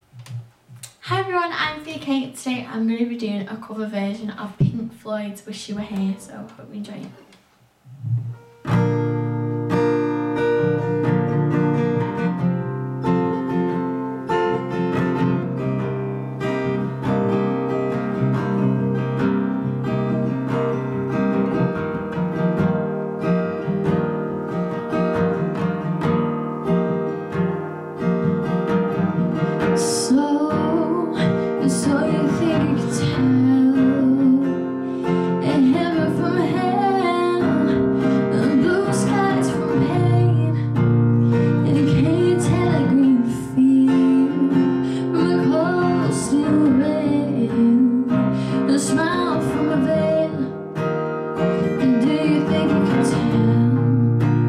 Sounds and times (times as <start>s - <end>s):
Music: 7.8s - 54.4s
Female singing: 29.8s - 34.7s, 35.4s - 40.8s, 41.5s - 50.6s, 51.8s - 54.2s.